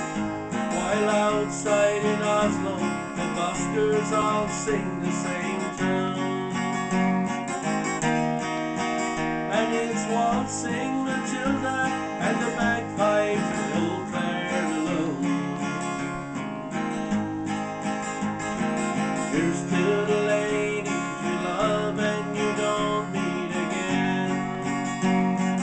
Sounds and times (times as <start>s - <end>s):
Music: 0.0s - 25.6s
Male singing: 0.7s - 6.6s, 9.5s - 15.6s, 19.3s - 24.8s.